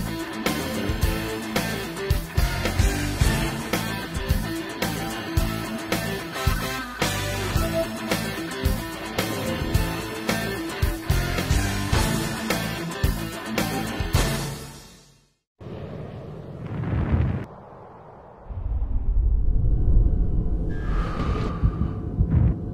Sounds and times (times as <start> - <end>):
Music: 0.0 - 15.4.